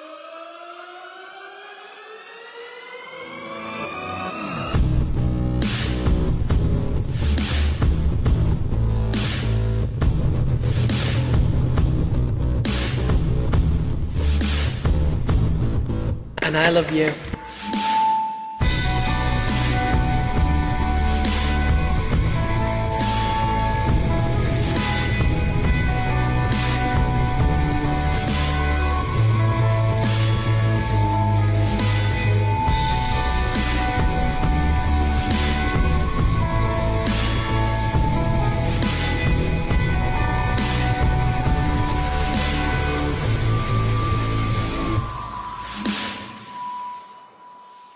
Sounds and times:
Music: 0.0s - 47.9s
Speech: 16.4s - 17.4s.

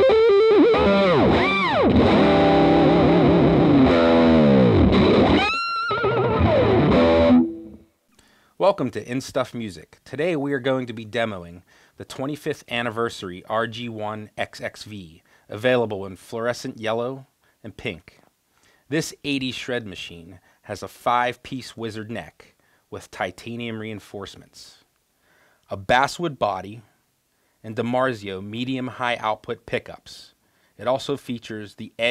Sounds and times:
Bass guitar: 0.0s - 7.9s
Speech: 8.6s - 18.3s, 18.9s - 24.9s, 25.7s - 27.0s, 27.6s - 32.1s.

